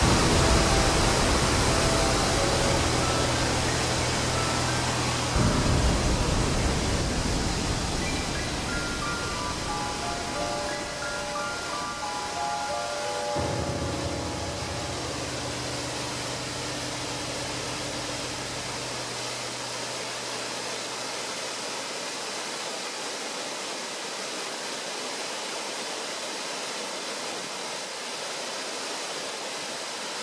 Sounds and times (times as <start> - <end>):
Waterfall: 0.0 - 30.2.